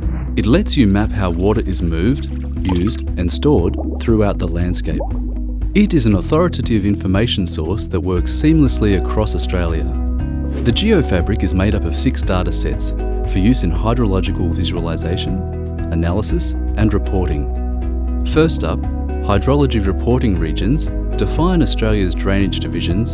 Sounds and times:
Music: 0.0 - 23.1
Speech: 0.4 - 5.1, 5.8 - 10.0, 10.6 - 17.5, 18.3 - 23.1.

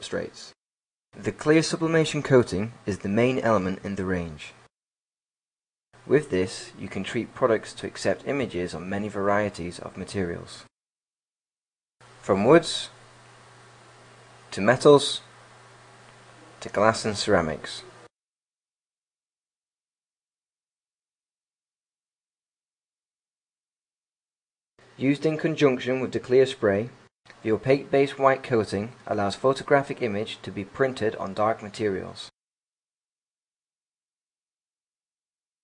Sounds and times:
Speech: 0.0 - 0.6, 1.2 - 4.7, 6.1 - 10.7, 12.2 - 13.0, 14.5 - 15.3, 16.4 - 18.1, 25.0 - 32.4.

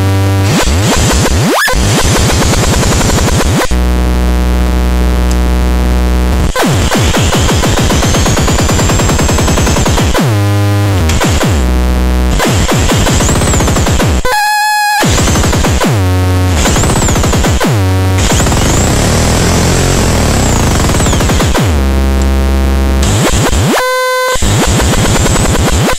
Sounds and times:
Sampler: 0.0 - 25.9.

